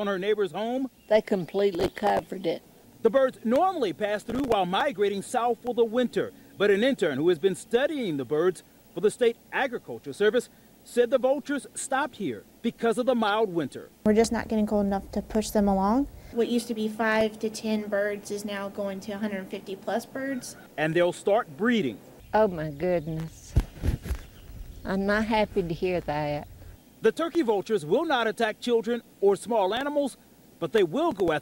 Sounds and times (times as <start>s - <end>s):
Speech: 0.0s - 23.5s, 24.9s - 31.4s.